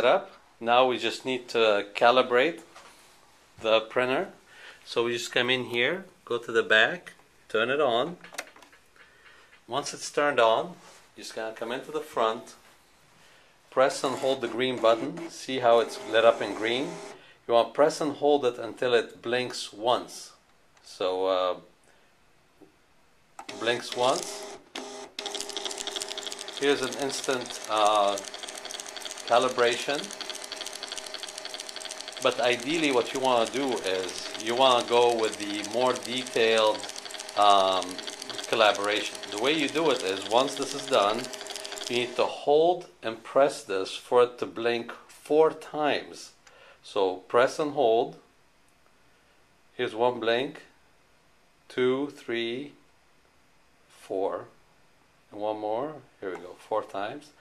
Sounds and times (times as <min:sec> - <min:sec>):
Speech: 0:00.0 - 0:02.7, 0:03.6 - 0:08.2, 0:09.7 - 0:12.6, 0:13.7 - 0:21.7, 0:23.5 - 0:24.4, 0:26.6 - 0:28.2, 0:29.3 - 0:30.1, 0:32.2 - 0:41.3, 0:41.9 - 0:48.3, 0:49.8 - 0:50.8, 0:51.7 - 0:52.8, 0:53.9 - 0:54.6, 0:55.3 - 0:57.4
Printer: 0:14.1 - 0:17.2, 0:23.4 - 0:42.4.